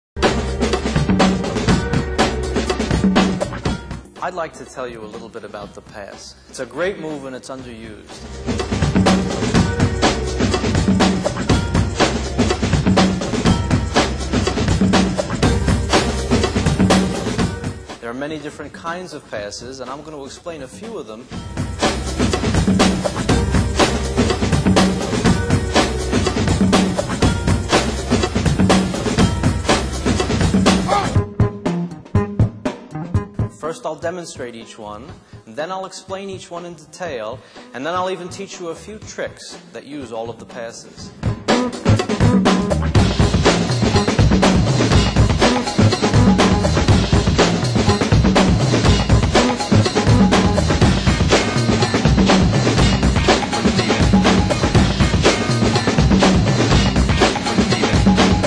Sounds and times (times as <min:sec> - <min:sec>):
Drum: 0:00.2 - 0:04.4, 0:08.2 - 0:18.0, 0:21.4 - 0:33.6, 0:41.2 - 0:58.4
Speech: 0:04.2 - 0:08.2, 0:18.0 - 0:21.3, 0:33.6 - 0:41.2.